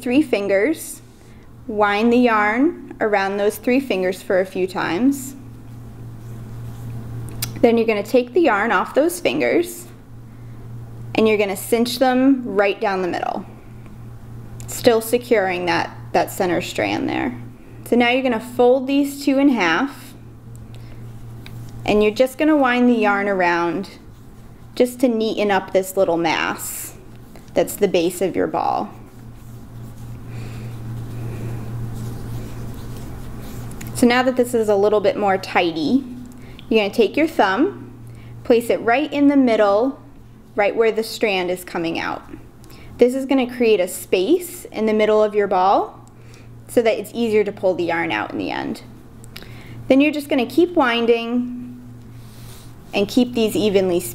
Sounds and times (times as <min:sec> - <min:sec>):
Speech: 0:00.0 - 0:01.0, 0:01.7 - 0:05.4, 0:07.6 - 0:10.0, 0:11.2 - 0:13.5, 0:14.7 - 0:20.2, 0:21.9 - 0:24.0, 0:24.8 - 0:27.0, 0:27.6 - 0:29.0, 0:34.0 - 0:36.1, 0:36.7 - 0:37.9, 0:38.5 - 0:40.0, 0:40.6 - 0:42.4, 0:43.0 - 0:46.0, 0:46.7 - 0:48.9, 0:49.9 - 0:51.6, 0:53.0 - 0:54.1.